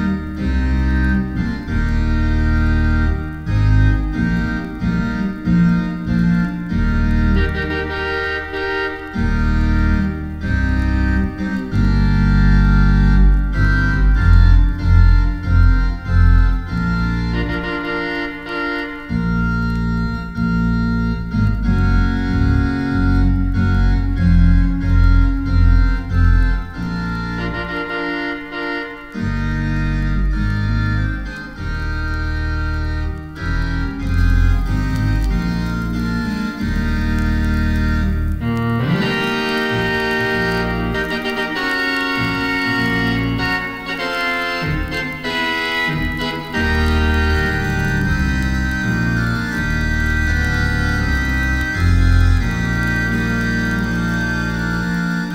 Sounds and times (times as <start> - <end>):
Music: 0.0 - 55.3.